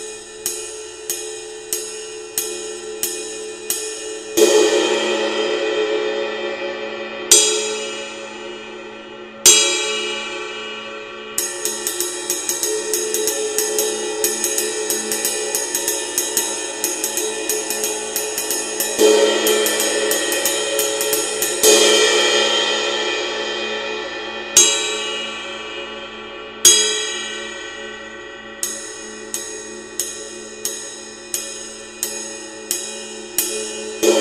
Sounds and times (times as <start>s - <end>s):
Music: 0.0s - 34.2s.